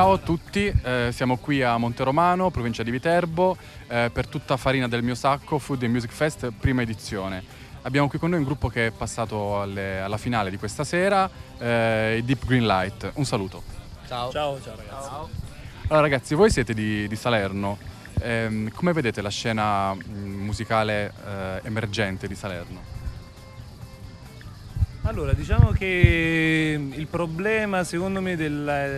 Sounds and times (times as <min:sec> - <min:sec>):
Speech: 0:00.0 - 0:22.9, 0:25.0 - 0:28.9
Music: 0:00.0 - 0:28.9.